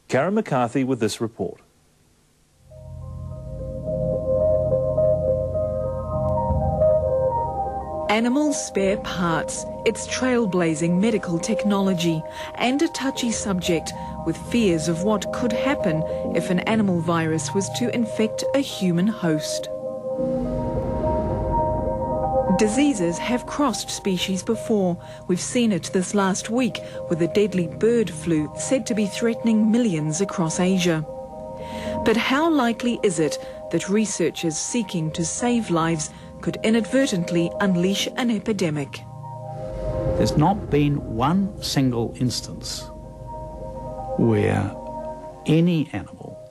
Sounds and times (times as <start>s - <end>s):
Music: 2.6s - 46.5s.